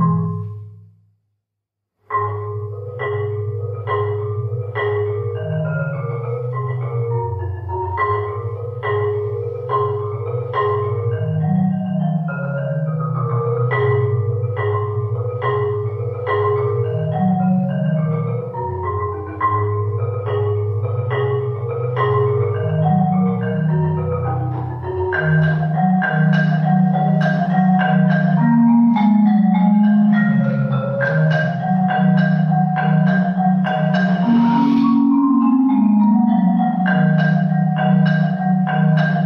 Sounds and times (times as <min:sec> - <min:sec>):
Marimba, xylophone: 0:00.0 - 0:00.9, 0:02.0 - 0:39.2.